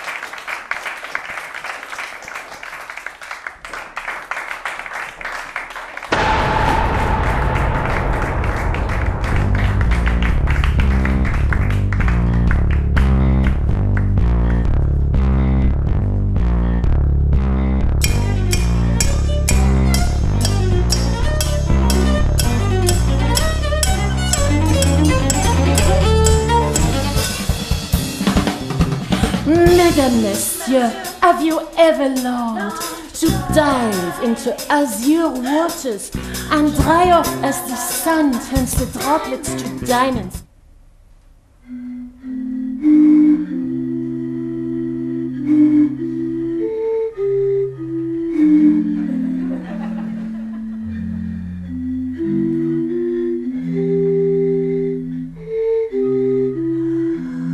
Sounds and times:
Drum kit: 0:06.1 - 0:14.4, 0:18.0 - 0:40.4
Bass drum: 0:06.1 - 0:31.3, 0:36.2 - 0:40.4
Cello: 0:18.0 - 0:27.8
Singing: 0:29.5 - 0:40.1.

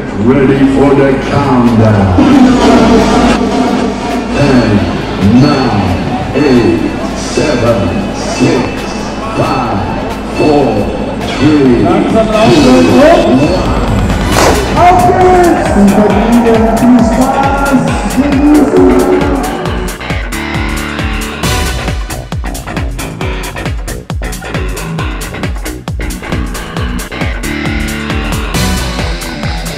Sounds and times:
Speech: 0:00.0 - 0:03.0, 0:04.3 - 0:13.8, 0:14.8 - 0:19.5.

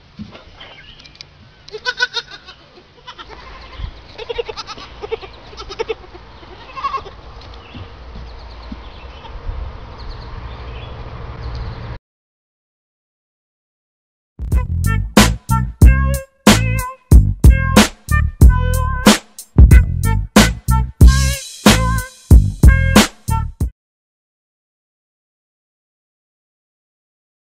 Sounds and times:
Music: 0:14.4 - 0:23.7.

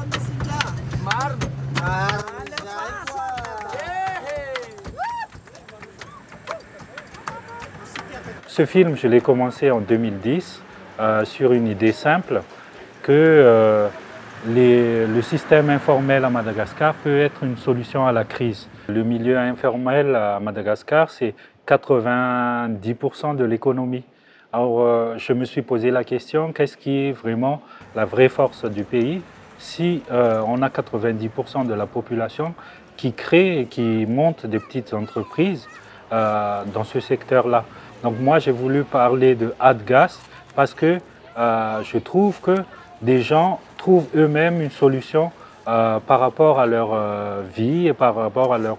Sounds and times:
Speech: 0:06.9 - 0:48.7.

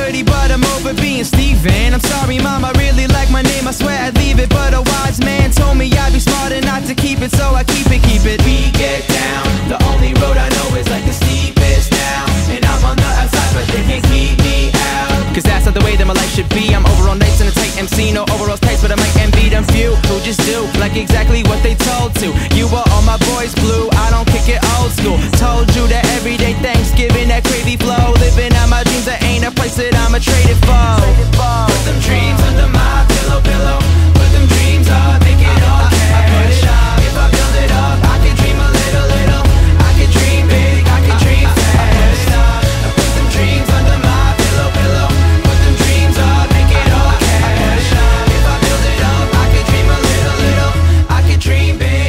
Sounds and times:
Music: 0:00.0 - 0:52.0.

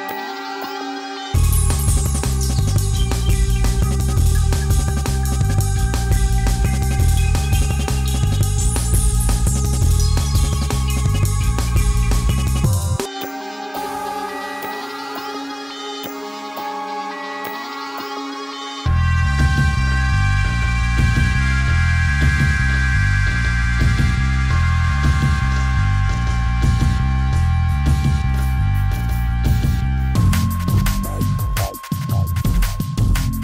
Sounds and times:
Music: 0:00.0 - 0:33.4.

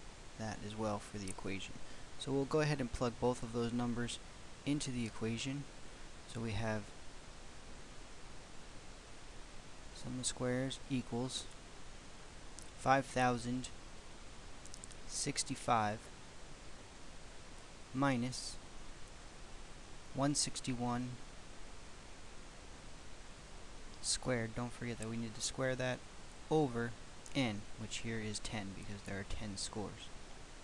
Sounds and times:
Inside, small room: 0:00.0 - 0:30.6
Speech: 0:00.4 - 0:05.7, 0:06.3 - 0:06.9, 0:10.0 - 0:11.5, 0:12.8 - 0:13.8, 0:15.1 - 0:16.1, 0:18.0 - 0:18.6, 0:20.2 - 0:21.2, 0:24.0 - 0:30.1.

